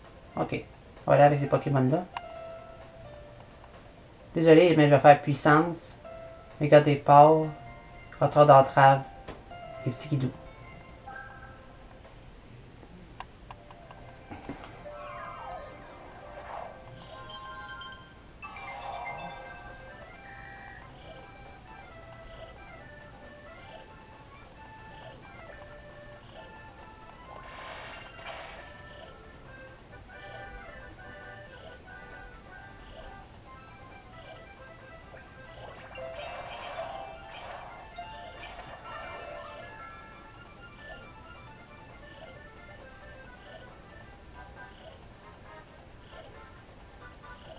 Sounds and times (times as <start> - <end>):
Music: 0.0 - 12.3, 13.5 - 47.5
Speech: 0.4 - 2.1, 4.4 - 5.9, 9.9 - 10.4.